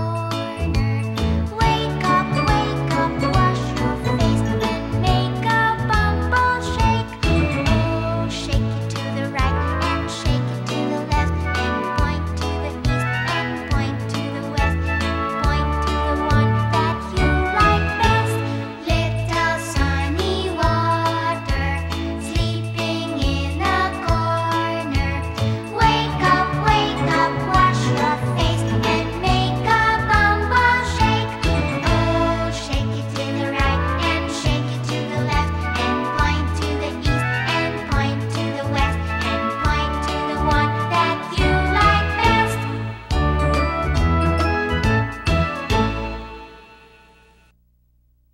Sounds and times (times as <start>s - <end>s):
Music: 0.0s - 47.6s.